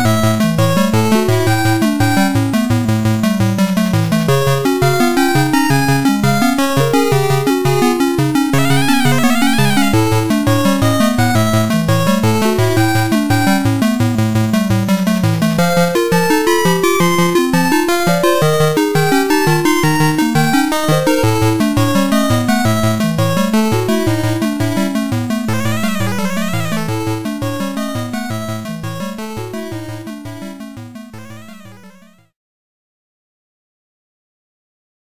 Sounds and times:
Video game music: 0.0s - 32.4s.

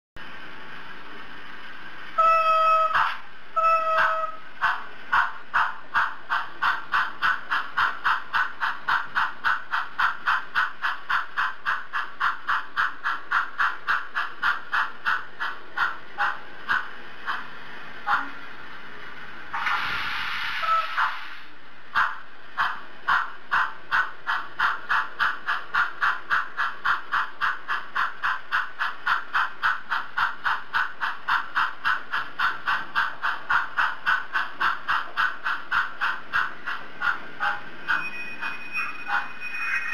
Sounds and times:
Railroad car, train wagon: 0.2s - 39.9s
Train: 0.2s - 39.9s.

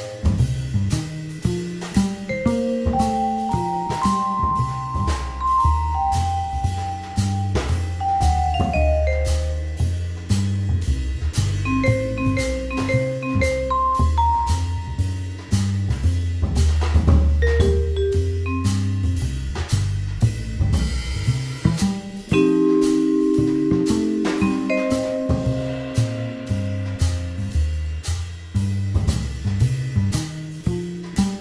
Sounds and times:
Percussion: 0.0s - 31.4s.

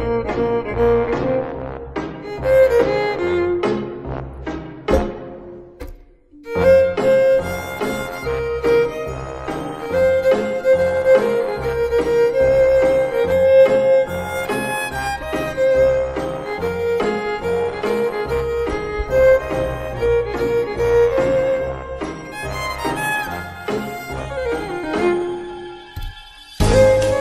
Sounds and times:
Violin, fiddle: 0.0s - 4.2s, 6.4s - 27.2s.

